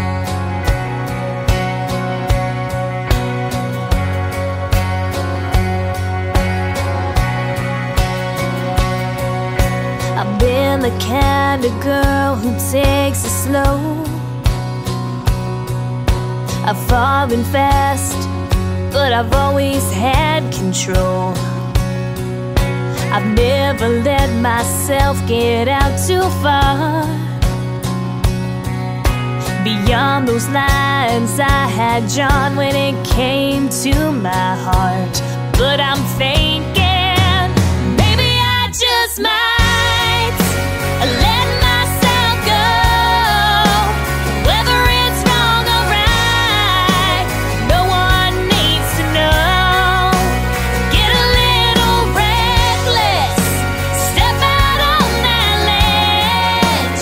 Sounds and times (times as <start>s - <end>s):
Music: 0.0s - 57.0s.